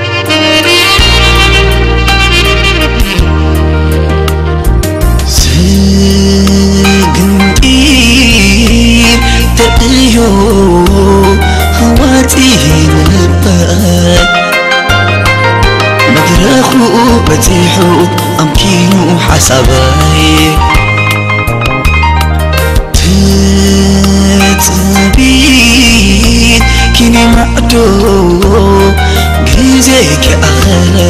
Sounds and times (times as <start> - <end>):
Music: 0.0 - 31.0.